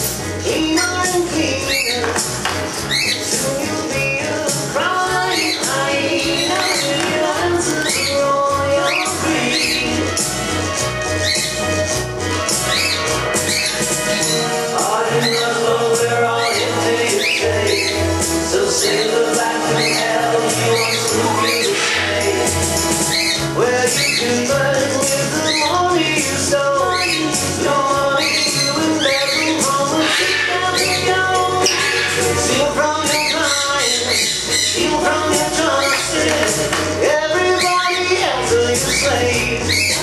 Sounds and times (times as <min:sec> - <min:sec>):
Music: 0:00.0 - 0:40.0.